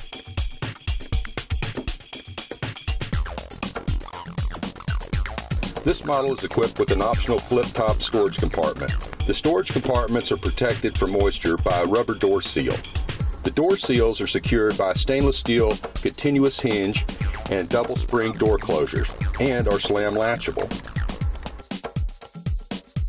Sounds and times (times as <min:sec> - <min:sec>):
Music: 0:00.0 - 0:23.0
Speech: 0:05.9 - 0:12.9, 0:13.5 - 0:20.8.